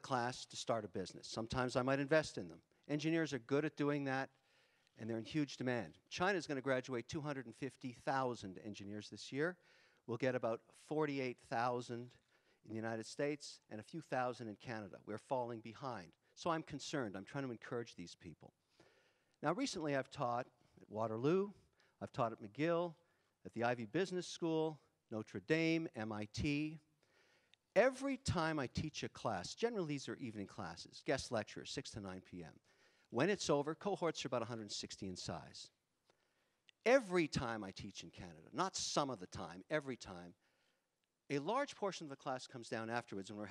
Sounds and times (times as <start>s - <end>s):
Speech: 0.0s - 4.4s, 5.0s - 18.6s, 19.4s - 26.9s, 27.8s - 35.8s, 36.8s - 40.4s, 41.3s - 43.5s.